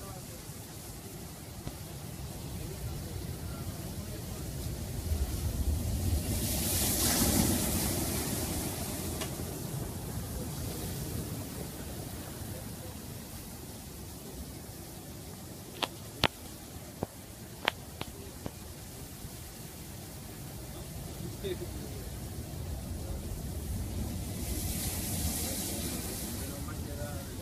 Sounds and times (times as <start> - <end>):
Waves, surf: 0.0 - 27.4.